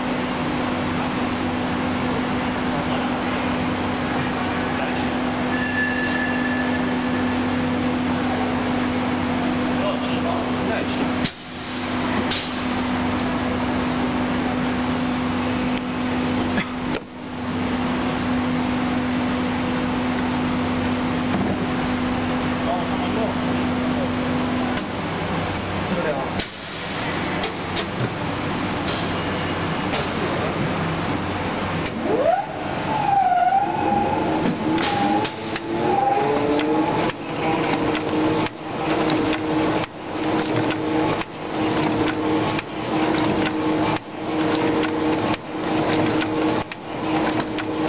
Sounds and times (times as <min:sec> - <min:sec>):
Speech: 0:09.7 - 0:11.2, 0:22.6 - 0:24.2, 0:25.9 - 0:26.4.